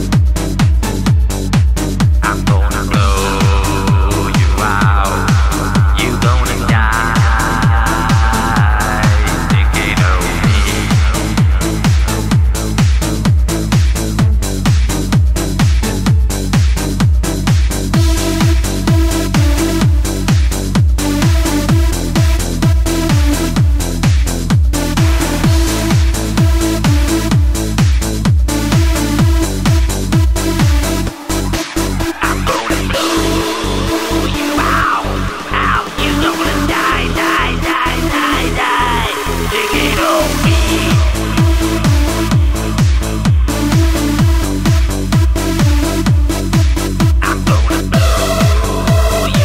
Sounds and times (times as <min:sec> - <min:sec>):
Electronic dance music: 0:00.0 - 0:49.4.